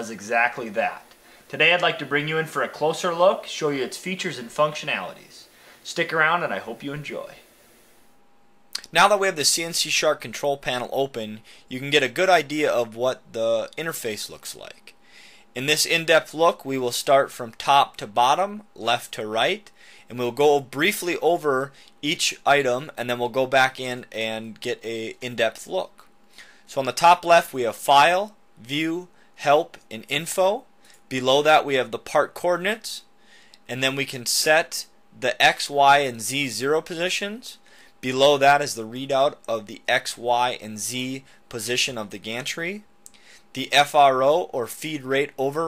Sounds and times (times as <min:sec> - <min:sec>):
Speech: 0:00.0 - 0:07.4, 0:08.8 - 0:14.9, 0:15.6 - 0:26.0, 0:26.7 - 0:33.1, 0:33.7 - 0:42.9, 0:43.6 - 0:45.6.